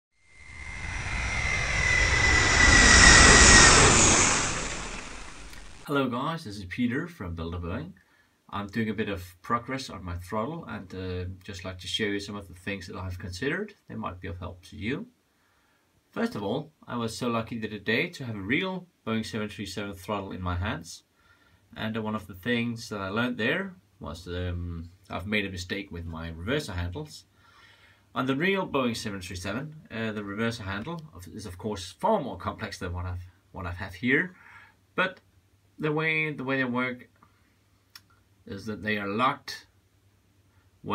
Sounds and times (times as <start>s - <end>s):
Inside, small room: 5.8s - 40.9s
Speech: 5.9s - 15.1s, 16.1s - 21.1s, 21.7s - 27.3s, 28.1s - 34.4s, 35.0s - 37.2s, 38.4s - 39.7s.